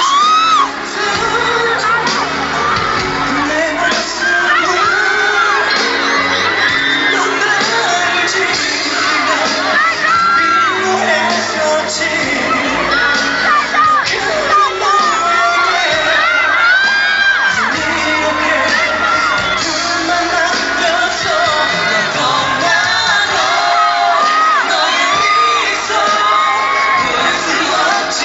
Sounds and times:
Music: 0.0s - 28.2s
Male singing: 0.1s - 28.2s.

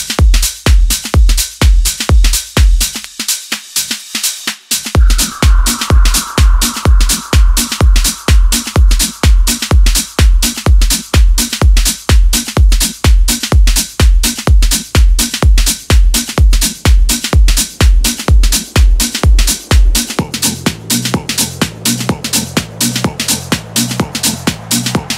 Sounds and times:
Music: 0.0s - 25.1s.

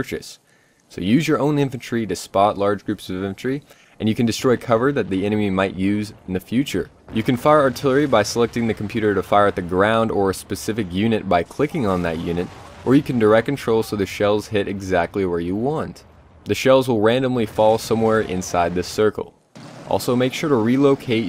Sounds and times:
Speech: 0.0s - 21.2s
Artillery fire: 7.1s - 10.4s, 11.7s - 14.2s, 19.6s - 20.7s.

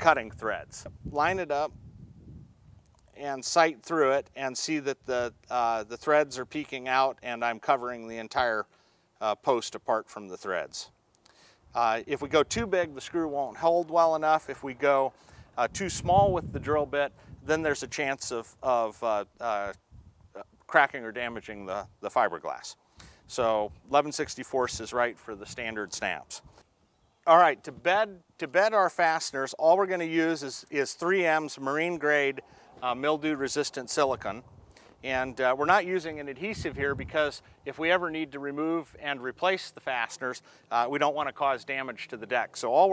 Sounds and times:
Speech: 0.0s - 1.8s, 3.2s - 11.0s, 11.8s - 19.8s, 20.4s - 26.5s, 27.3s - 34.4s, 35.0s - 42.9s.

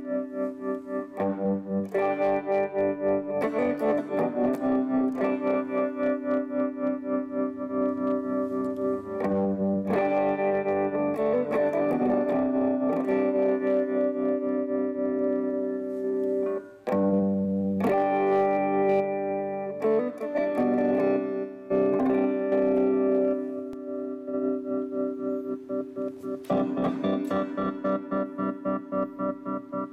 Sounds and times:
Distortion: 0.0s - 29.9s
Effects unit: 0.0s - 29.9s
Guitar: 0.0s - 29.9s.

